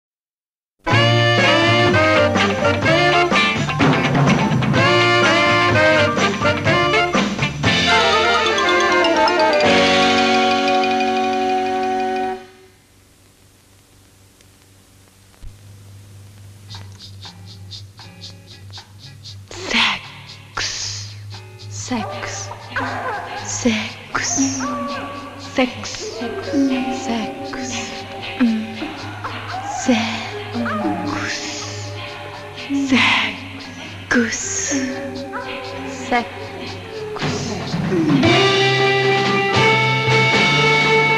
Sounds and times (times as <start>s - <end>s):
Bell: 7.9s - 12.7s.